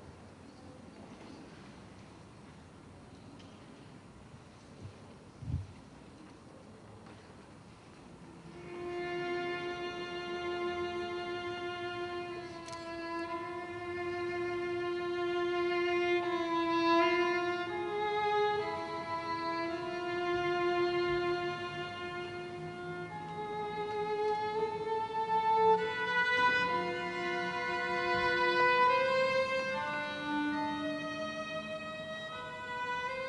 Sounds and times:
Violin, fiddle: 8.5s - 33.2s.

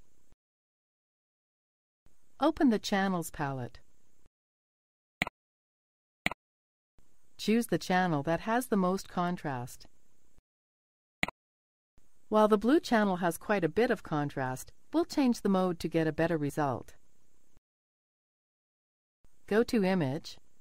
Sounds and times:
Speech: 2.4s - 3.8s, 7.4s - 9.9s, 12.3s - 17.0s, 19.5s - 20.4s.

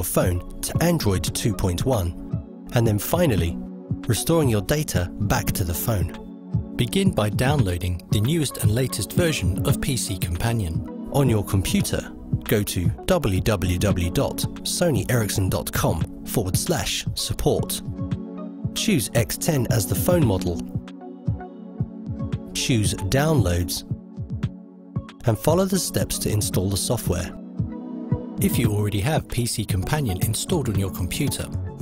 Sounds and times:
Speech: 0.0s - 6.2s, 6.8s - 17.9s, 18.8s - 20.8s, 22.5s - 23.9s, 25.2s - 27.4s, 28.4s - 31.8s
Music: 0.0s - 31.8s.

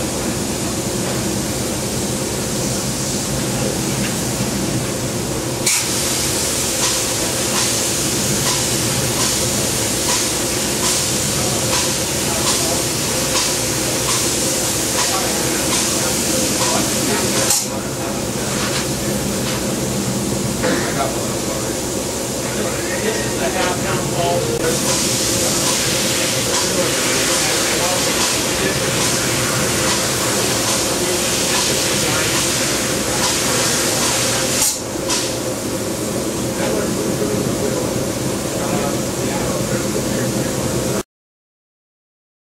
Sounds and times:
Spray: 5.6s - 17.8s, 24.8s - 36.1s.

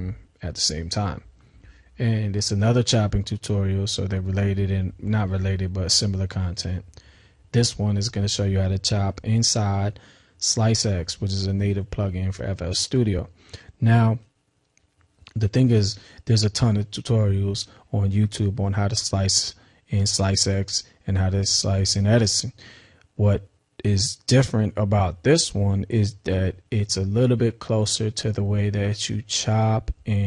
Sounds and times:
Speech: 0.0s - 1.3s, 2.0s - 6.9s, 7.5s - 14.3s, 15.3s - 22.6s, 23.2s - 30.2s.

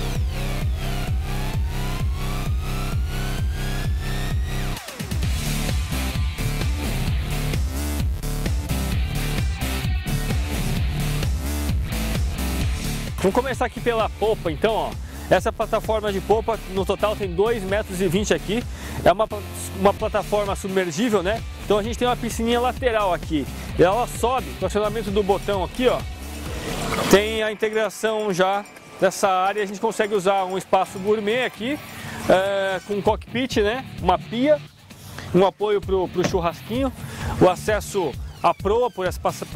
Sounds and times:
Music: 0.0s - 39.5s.

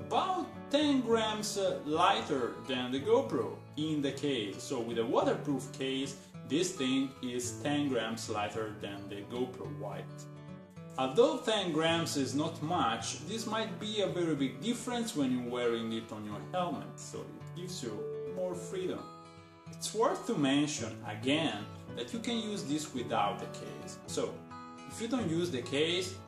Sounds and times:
Speech: 0.0s - 10.2s, 11.0s - 19.1s, 19.8s - 26.2s
Music: 0.0s - 26.2s.

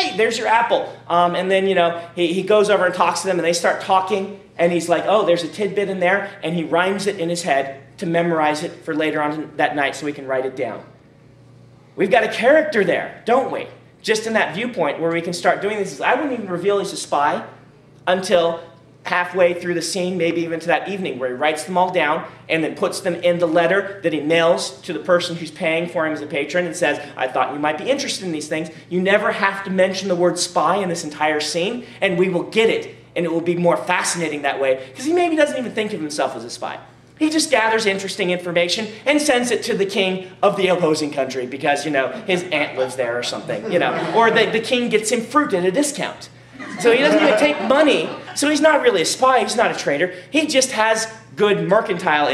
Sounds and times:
Speech: 0.0s - 10.9s, 12.0s - 52.3s.

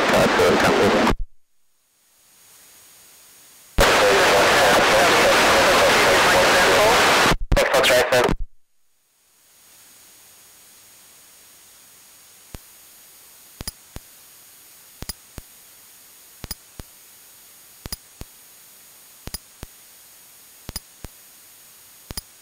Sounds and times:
Speech: 0.0s - 1.1s, 3.8s - 8.4s.

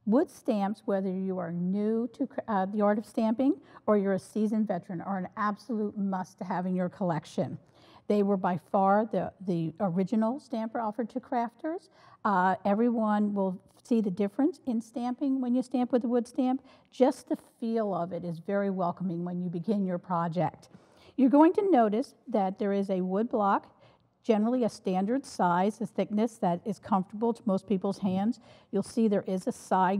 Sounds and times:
Speech: 0.0s - 29.9s.

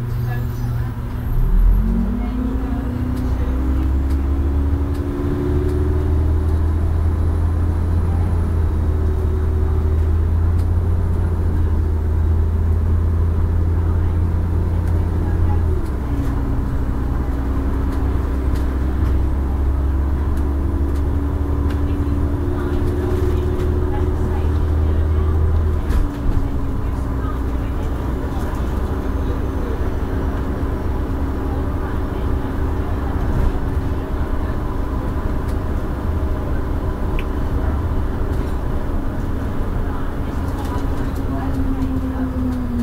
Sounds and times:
Speech: 0.0s - 4.3s, 13.6s - 42.8s
Bus: 0.0s - 42.8s.

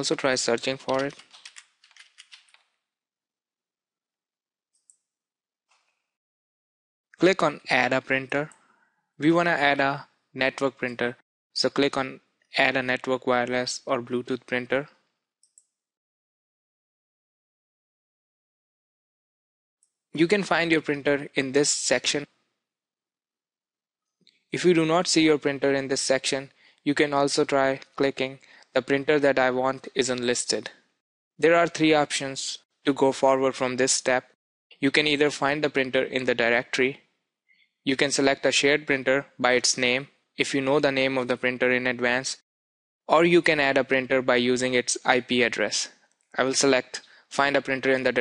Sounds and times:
Speech: 0.0s - 1.2s, 7.2s - 8.6s, 9.2s - 14.9s, 20.2s - 22.3s, 24.6s - 30.8s, 31.4s - 37.0s, 37.9s - 42.4s, 43.1s - 48.2s.

